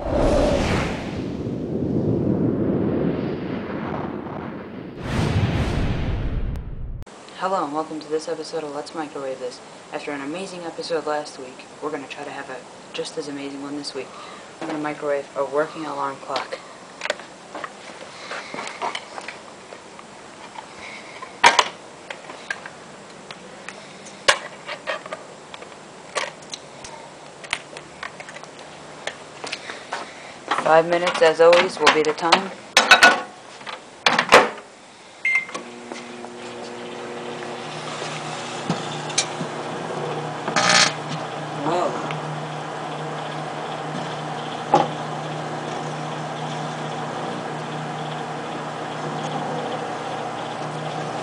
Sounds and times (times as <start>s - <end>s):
Speech: 7.3s - 16.7s, 30.6s - 32.6s, 41.6s - 42.1s.